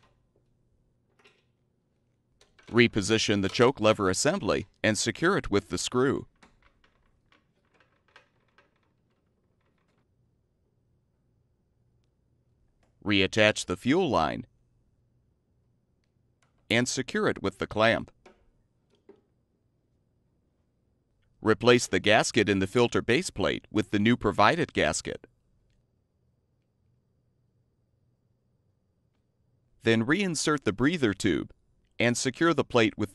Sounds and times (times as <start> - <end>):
Speech: 2.7 - 6.3, 13.0 - 14.5, 16.7 - 18.1, 21.4 - 25.3, 29.8 - 33.1.